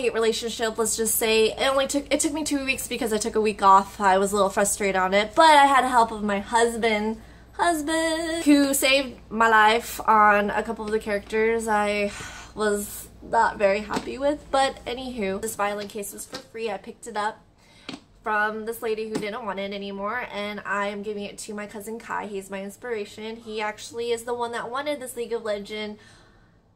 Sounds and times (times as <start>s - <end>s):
Speech: 0.0s - 17.4s, 18.2s - 26.0s.